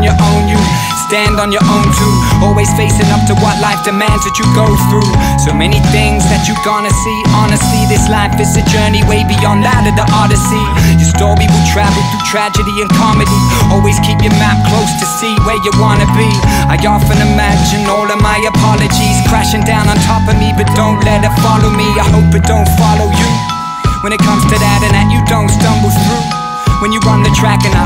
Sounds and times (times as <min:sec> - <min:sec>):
Music: 0:00.0 - 0:27.8.